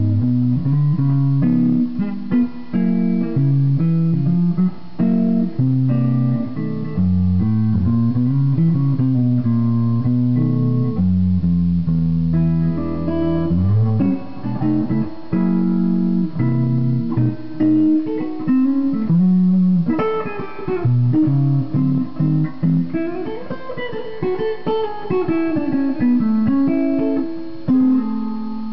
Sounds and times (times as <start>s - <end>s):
Electric guitar: 0.0s - 28.7s.